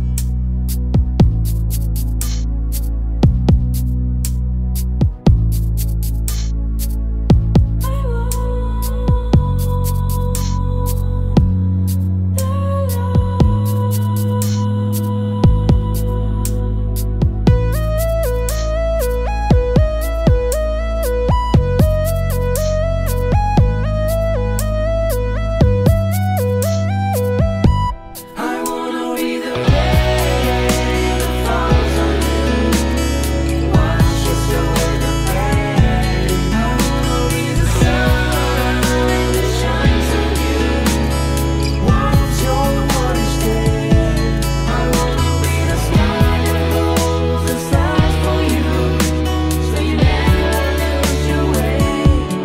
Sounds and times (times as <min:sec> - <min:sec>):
Music: 0:00.0 - 0:52.4.